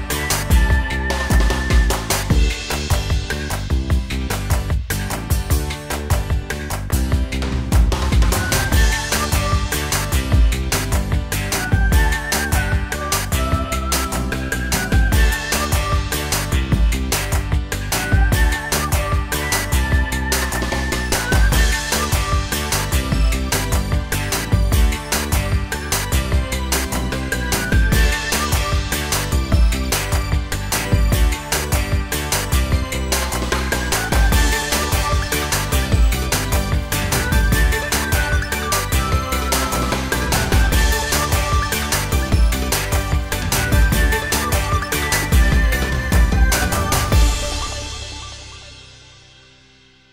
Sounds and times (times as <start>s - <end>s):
Music: 0.0s - 50.1s.